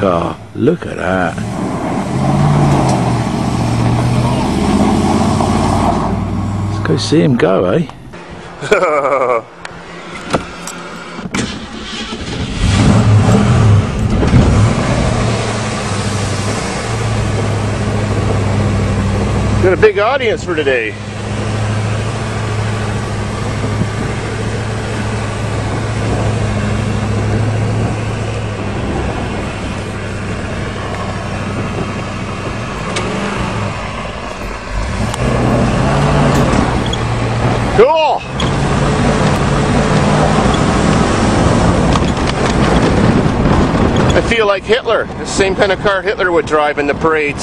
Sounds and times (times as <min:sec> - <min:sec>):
Vehicle: 0:00.0 - 0:47.4
Accelerating, revving, vroom: 0:01.4 - 0:06.9, 0:12.4 - 0:19.8, 0:21.0 - 0:29.8, 0:30.4 - 0:44.1.